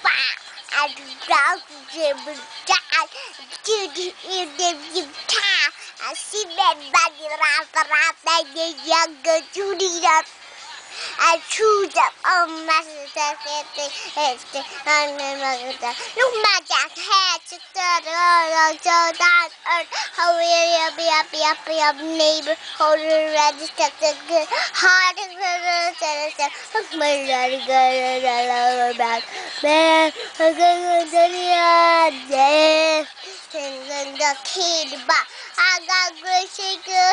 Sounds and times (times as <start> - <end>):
Child singing: 0.0 - 10.3, 11.2 - 37.1
Music: 0.0 - 37.1.